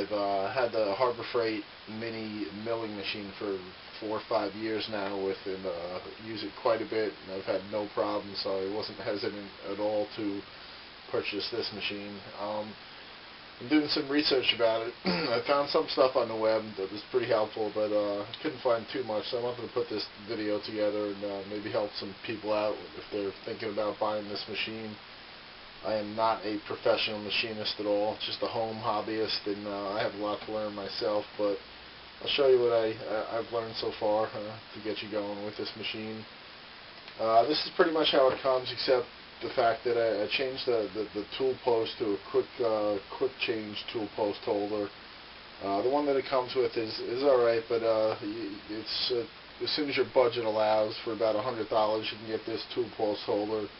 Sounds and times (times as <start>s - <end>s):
Speech: 0.0s - 10.5s, 11.1s - 12.8s, 13.6s - 25.0s, 25.8s - 31.6s, 32.2s - 36.3s, 37.2s - 45.0s, 45.6s - 53.7s.